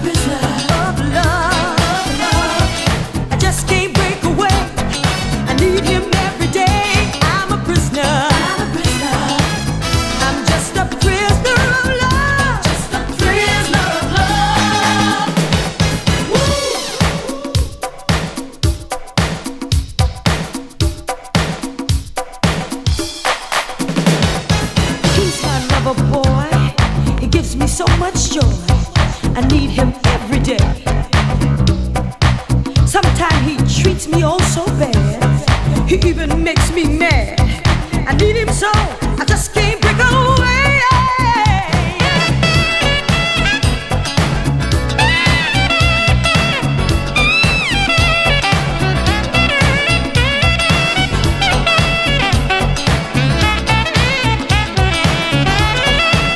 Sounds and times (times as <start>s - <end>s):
Funk: 0.0s - 56.3s.